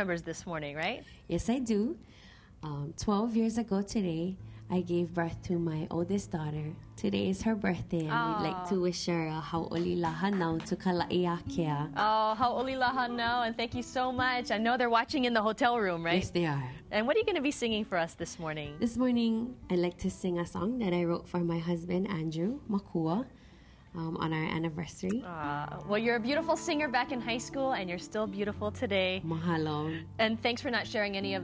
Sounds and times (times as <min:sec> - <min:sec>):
Speech: 0:02.7 - 0:11.9.